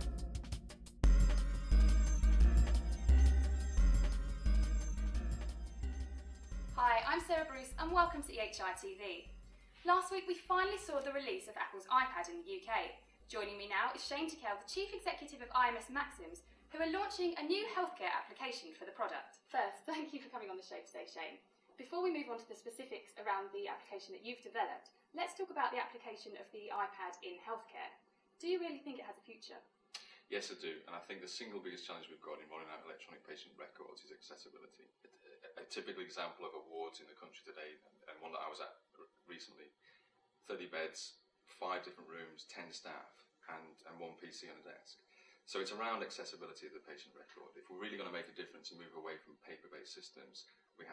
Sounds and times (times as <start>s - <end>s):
Music: 0.0s - 9.7s
Speech: 6.8s - 9.2s, 9.8s - 29.6s, 30.3s - 39.7s, 40.5s - 50.9s.